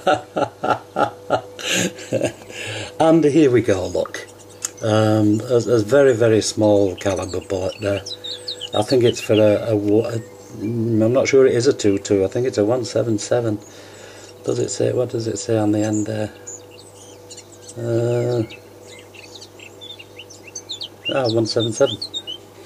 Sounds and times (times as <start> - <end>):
Speech: 3.0 - 8.1, 8.7 - 13.6, 14.4 - 16.4, 17.8 - 18.5, 21.1 - 22.0
Chirp, tweet: 3.5 - 22.5.